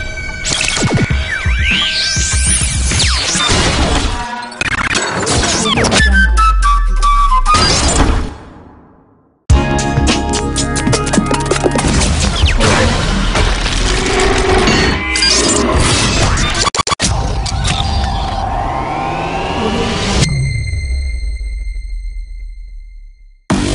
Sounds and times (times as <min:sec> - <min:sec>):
Music: 0:00.0 - 0:08.8, 0:09.5 - 0:13.6, 0:20.2 - 0:23.7
Sound effect: 0:00.0 - 0:09.3, 0:10.8 - 0:23.7.